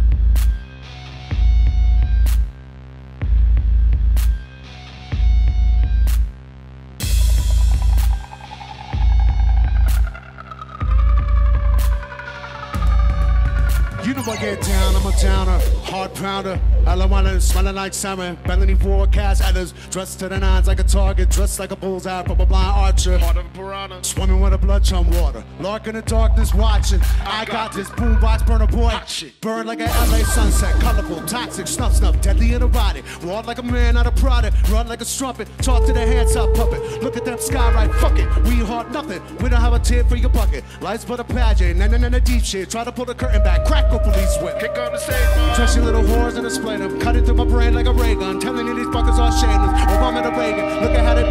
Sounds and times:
Music: 0.0s - 51.3s.

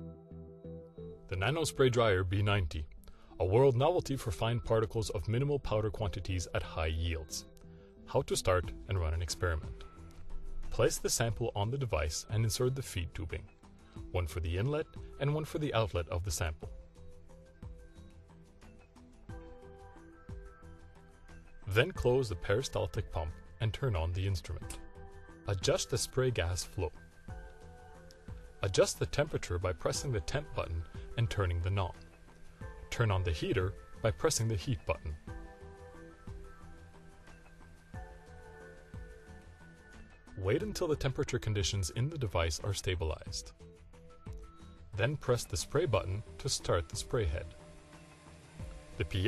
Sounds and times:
Music: 0.0s - 49.2s
Speech: 1.3s - 7.5s, 8.1s - 9.7s, 10.8s - 13.5s, 14.1s - 16.7s, 21.7s - 24.8s, 25.5s - 27.0s, 28.6s - 32.0s, 32.9s - 35.2s, 40.4s - 43.5s, 45.0s - 47.5s, 49.0s - 49.2s.

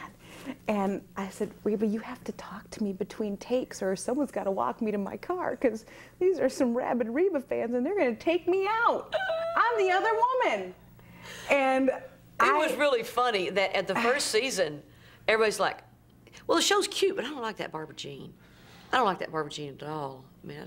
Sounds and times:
Female speech, woman speaking: 0.6s - 10.8s, 11.5s - 20.6s.

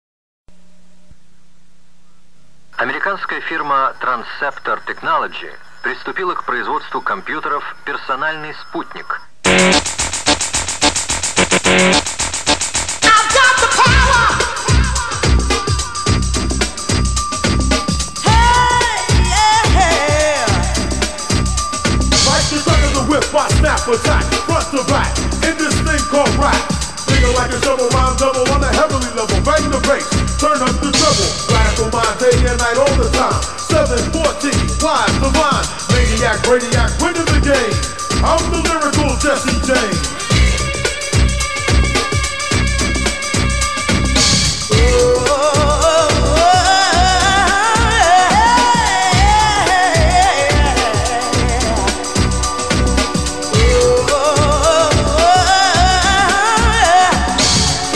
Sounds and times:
Speech: 2.8s - 9.3s
Music: 9.5s - 57.9s.

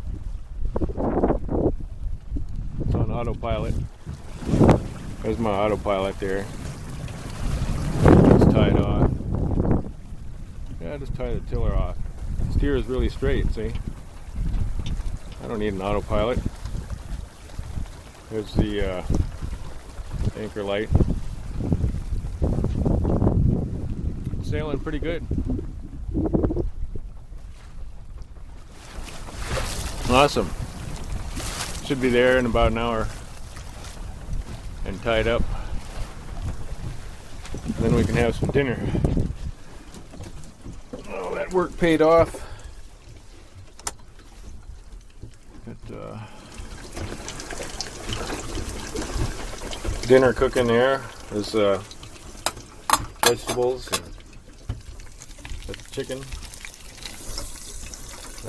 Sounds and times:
Sailboat, sailing ship: 0.0s - 58.4s
Speech: 2.9s - 3.8s, 5.2s - 6.5s, 8.4s - 9.1s, 10.8s - 13.8s, 15.4s - 16.4s, 18.3s - 19.1s, 20.3s - 20.9s, 24.4s - 25.2s, 30.0s - 30.5s, 31.8s - 33.1s, 34.8s - 35.5s, 37.8s - 39.0s, 41.0s - 42.5s, 45.7s - 46.2s, 50.1s - 51.9s, 53.2s - 54.0s, 55.7s - 56.3s.

